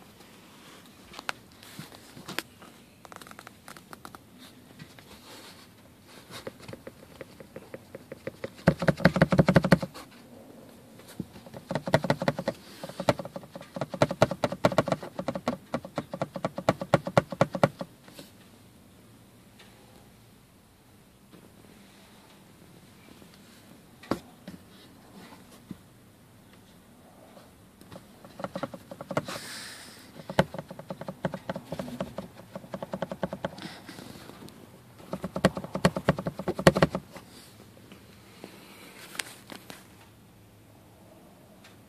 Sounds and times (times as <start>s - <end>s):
Rattle: 35.0s - 37.0s.